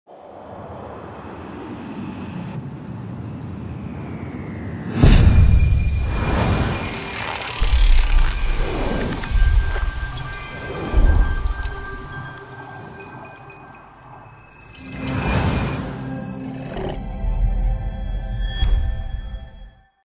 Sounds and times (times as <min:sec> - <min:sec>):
Music: 0:09.0 - 0:20.0.